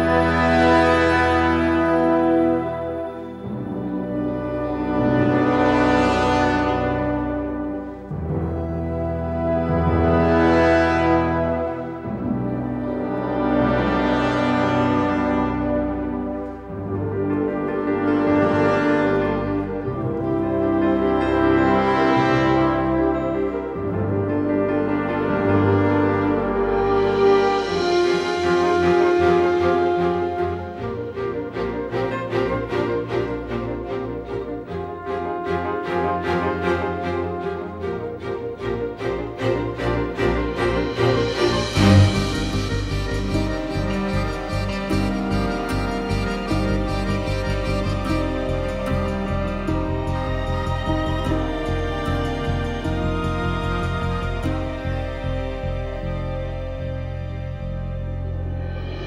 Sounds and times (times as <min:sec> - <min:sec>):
Music: 0:00.0 - 0:59.0.